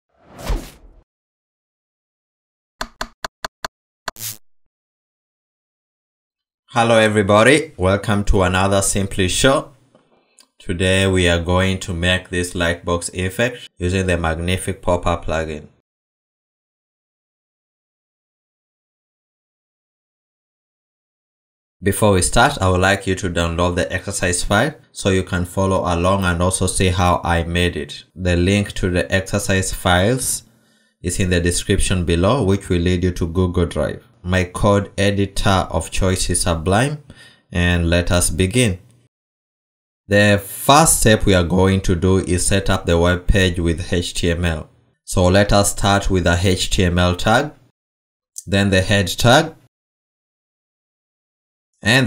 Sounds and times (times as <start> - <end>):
Speech: 6.7 - 9.8, 10.4 - 15.8, 21.8 - 38.8, 40.1 - 47.7, 48.4 - 49.7, 51.8 - 52.0.